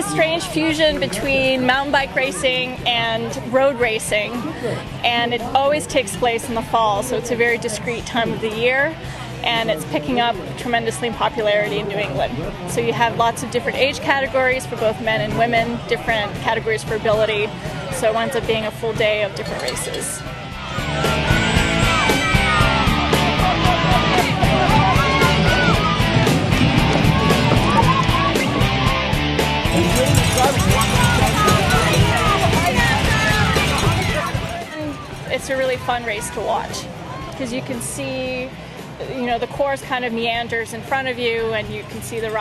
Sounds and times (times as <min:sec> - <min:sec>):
Speech: 0:00.0 - 0:20.2, 0:29.8 - 0:42.4
Music: 0:00.0 - 0:42.4.